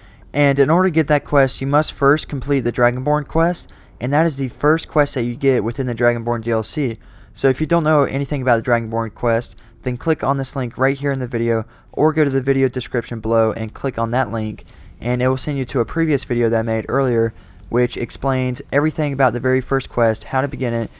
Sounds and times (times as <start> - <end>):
Speech: 0.3 - 20.9.